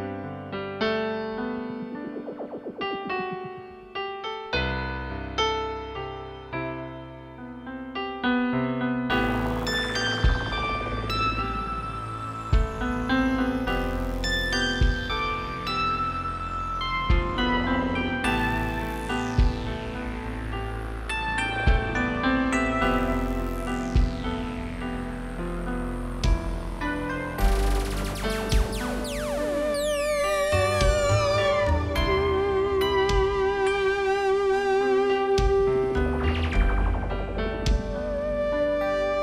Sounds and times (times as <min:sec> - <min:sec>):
Tender music: 0:09.0 - 0:39.2.